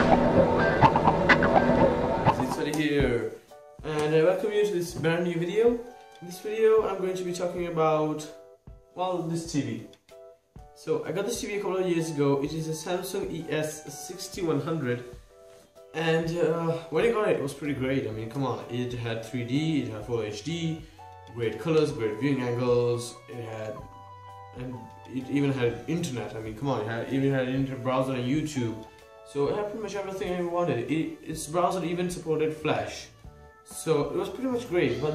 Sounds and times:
Music: 0:00.0 - 0:35.1
Speech: 0:02.4 - 0:08.4, 0:09.0 - 0:09.9, 0:10.8 - 0:15.1, 0:15.9 - 0:23.9, 0:24.6 - 0:33.1, 0:33.7 - 0:35.1.

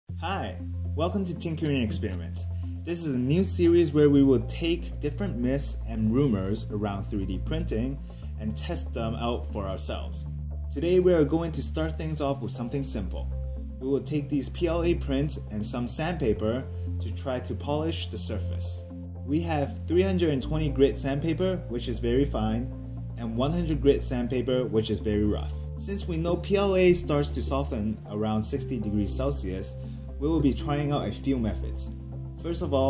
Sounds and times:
Music: 0:00.1 - 0:32.8
Speech: 0:00.2 - 0:32.8.

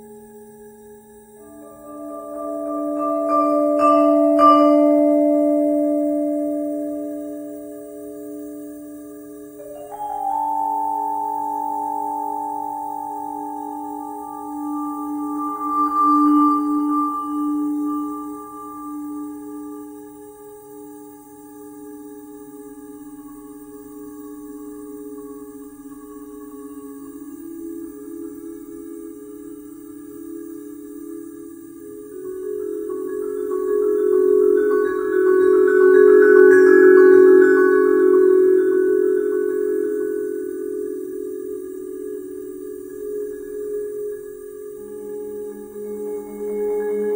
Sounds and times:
Marimba, xylophone: 0:09.2 - 0:20.0, 0:31.8 - 0:47.1
Vibraphone: 0:09.6 - 0:20.0.

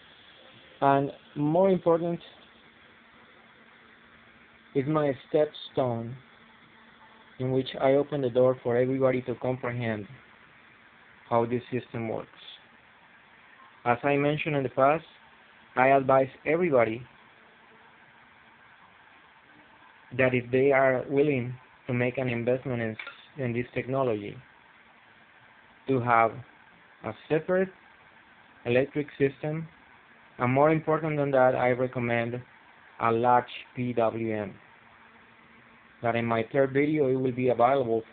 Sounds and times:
Speech: 0:00.8 - 0:02.4, 0:04.8 - 0:06.2, 0:07.4 - 0:10.2, 0:11.3 - 0:12.7, 0:13.8 - 0:15.2, 0:15.8 - 0:17.1, 0:20.1 - 0:24.5, 0:25.9 - 0:27.7, 0:28.6 - 0:29.7, 0:30.4 - 0:34.6, 0:36.0 - 0:38.1.

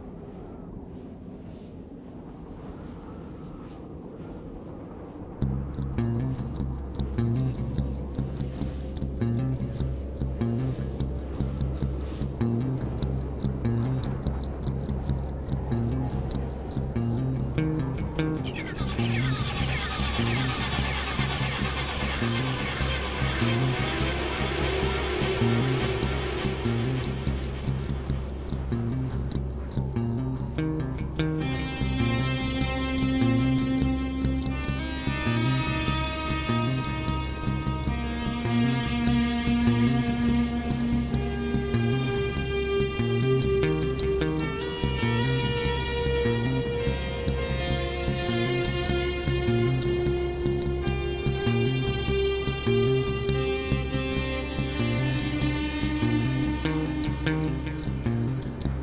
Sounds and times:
Progressive rock: 0:18.2 - 0:29.3.

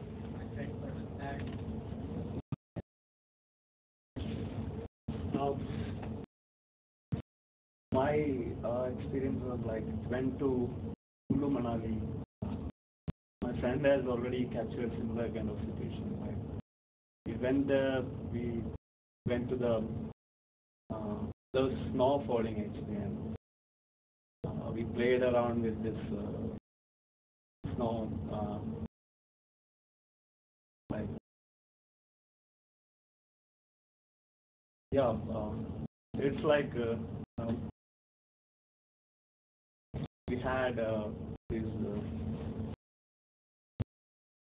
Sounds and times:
Narration, monologue: 0:00.0 - 0:02.7, 0:04.2 - 0:06.3, 0:08.0 - 0:16.6, 0:17.3 - 0:20.2, 0:20.9 - 0:23.4, 0:24.5 - 0:26.6, 0:27.7 - 0:28.9, 0:30.9 - 0:31.2, 0:34.9 - 0:37.8, 0:40.0 - 0:42.8
Male speech, man speaking: 0:00.4 - 0:01.5, 0:05.4 - 0:05.6, 0:08.0 - 0:12.1, 0:13.4 - 0:16.4, 0:17.3 - 0:19.9, 0:20.9 - 0:23.2, 0:24.5 - 0:26.5, 0:27.7 - 0:28.7, 0:30.9 - 0:31.2, 0:35.0 - 0:35.6, 0:36.2 - 0:37.7, 0:40.3 - 0:42.1.

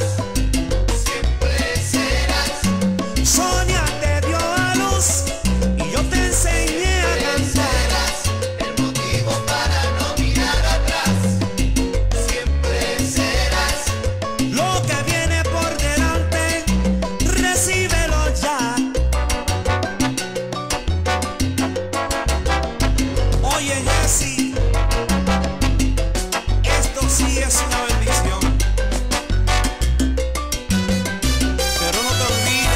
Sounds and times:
Salsa music: 0:00.0 - 0:32.7.

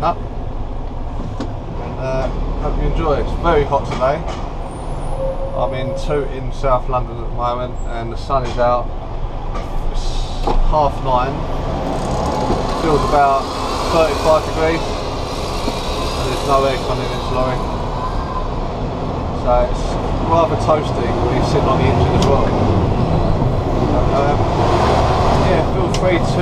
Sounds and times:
Truck: 0:00.0 - 0:26.4
Speech: 0:02.0 - 0:04.3, 0:05.6 - 0:08.9, 0:09.9 - 0:11.4, 0:12.8 - 0:14.8, 0:16.2 - 0:17.6, 0:19.4 - 0:22.6, 0:24.0 - 0:24.4, 0:25.4 - 0:26.4.

